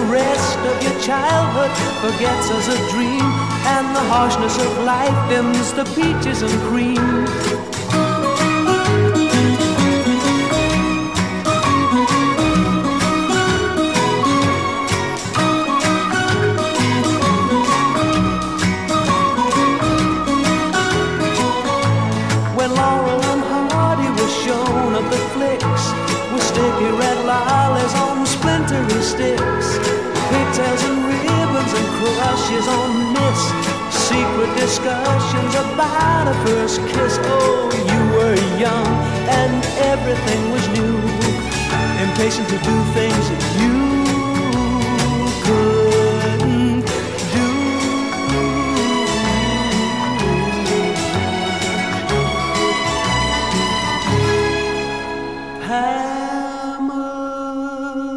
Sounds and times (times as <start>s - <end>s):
Music: 0.0s - 58.1s.